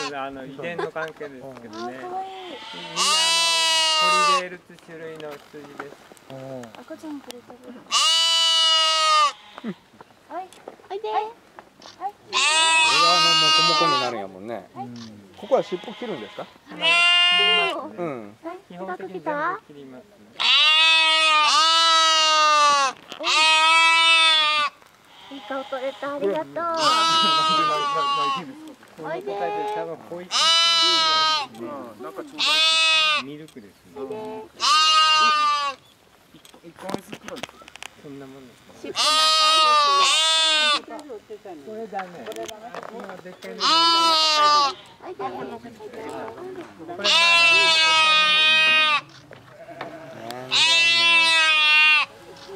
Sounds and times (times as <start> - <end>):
Livestock, farm animals, working animals: 0.0 - 19.4, 20.4 - 52.5.